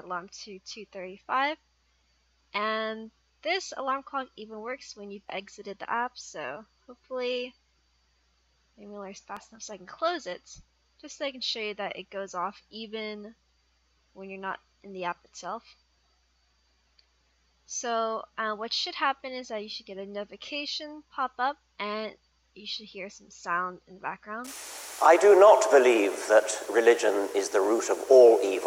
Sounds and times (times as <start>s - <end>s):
Speech: 0.0s - 1.6s, 2.6s - 7.5s, 8.8s - 13.3s, 14.2s - 15.6s, 17.7s - 28.6s.